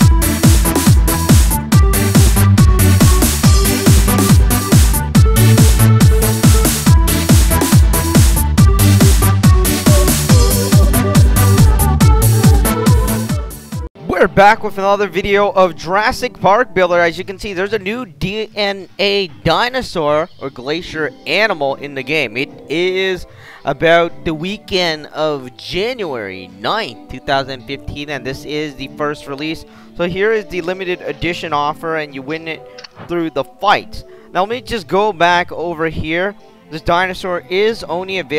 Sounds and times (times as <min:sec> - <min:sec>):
Techno: 0:00.0 - 0:13.9
Trance music: 0:00.0 - 0:13.9
Speech: 0:14.0 - 0:38.3.